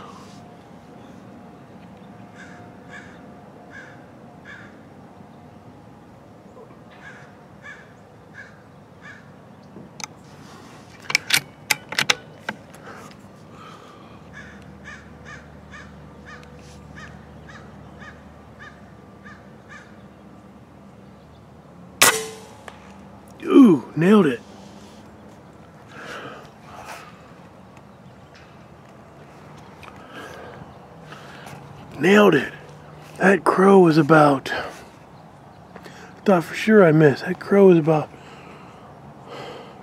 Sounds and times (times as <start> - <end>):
Speech: 23.4 - 24.4, 32.0 - 32.6, 33.2 - 34.8, 36.2 - 38.1.